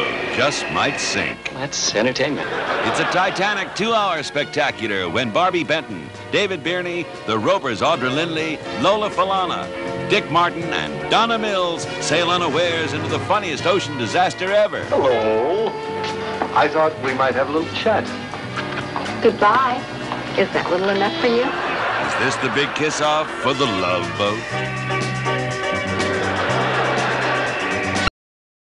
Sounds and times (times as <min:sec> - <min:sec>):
Music: 0:00.0 - 0:28.1
Speech: 0:22.0 - 0:24.5.